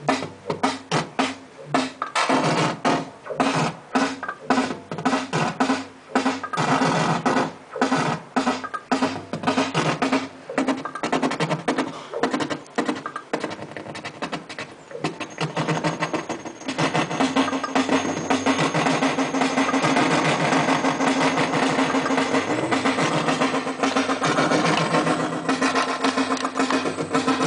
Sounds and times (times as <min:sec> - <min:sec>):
Synthesizer: 0:00.0 - 0:27.4.